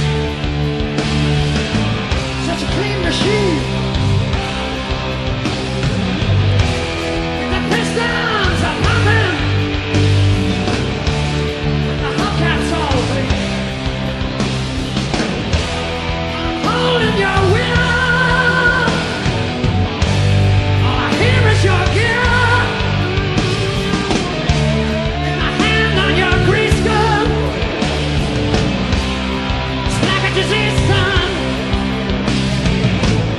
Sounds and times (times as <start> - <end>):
Music: 0.0 - 33.3.